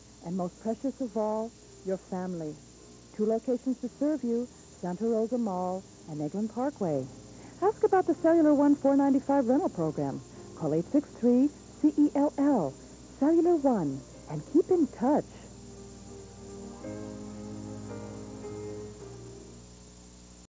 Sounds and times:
Music: 0.0s - 20.4s
Speech: 0.2s - 2.6s, 3.2s - 15.5s.

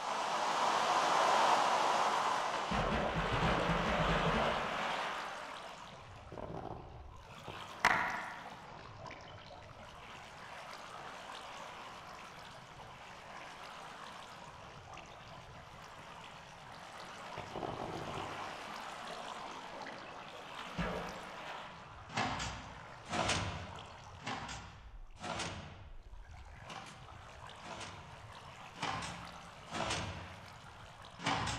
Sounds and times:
Stream: 0.0s - 31.5s.

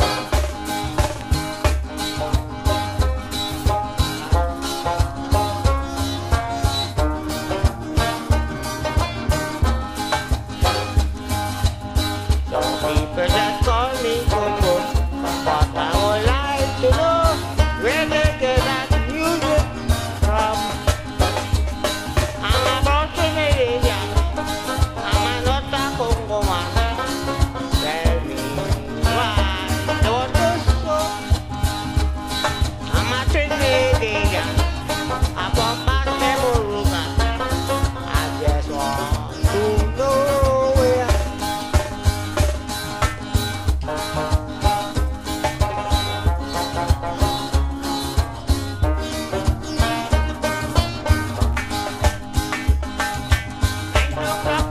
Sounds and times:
Music: 0.0s - 54.7s.

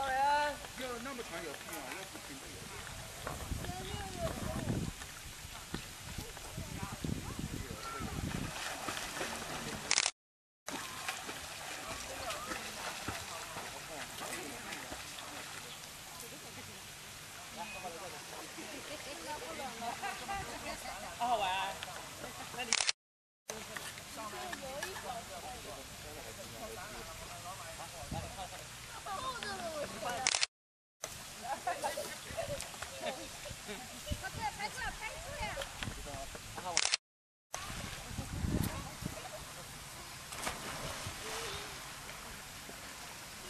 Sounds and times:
Stream: 0.0s - 43.5s.

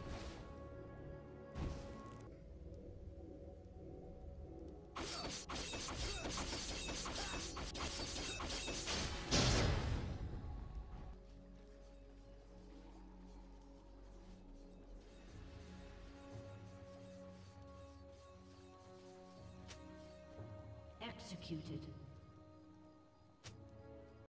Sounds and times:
Speech: 21.0s - 22.1s.

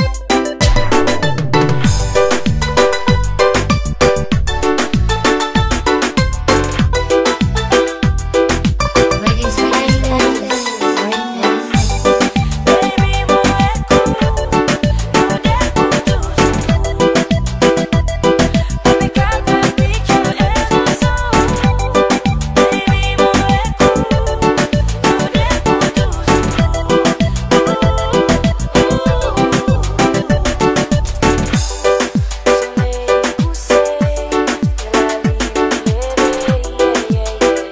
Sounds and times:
Music: 0.0s - 37.7s.

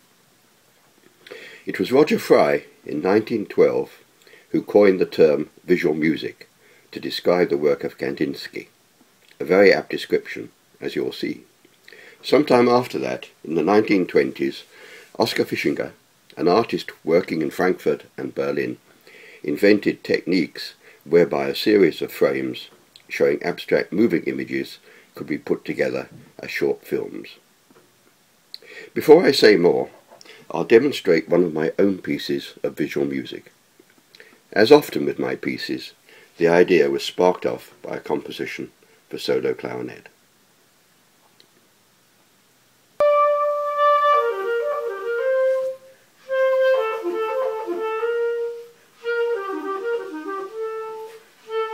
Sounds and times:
Speech: 1.7s - 8.7s, 9.4s - 11.5s, 12.2s - 18.8s, 19.4s - 27.4s, 28.9s - 33.6s, 34.5s - 40.2s.

